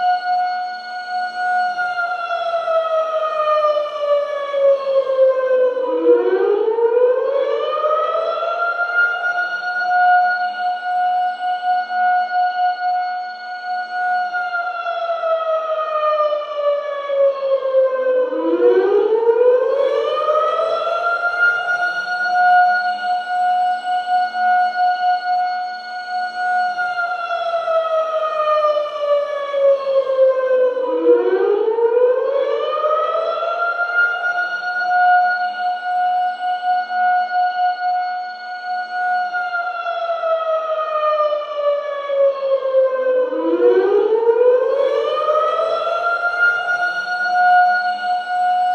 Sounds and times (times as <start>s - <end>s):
Civil defense siren: 0.0s - 48.7s.